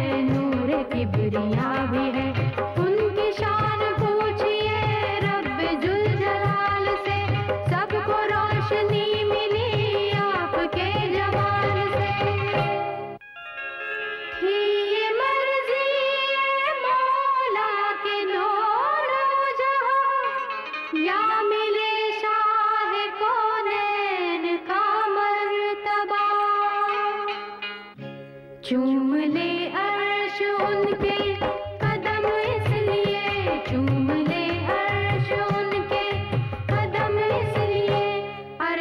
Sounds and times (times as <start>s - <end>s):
Music: 0.0s - 38.8s.